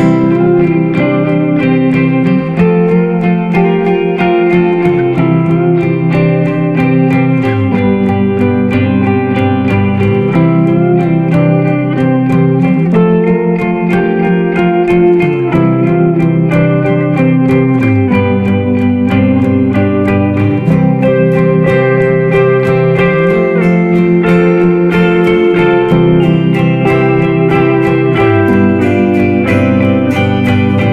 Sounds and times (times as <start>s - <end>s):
Plucked string instrument: 0.0s - 30.9s.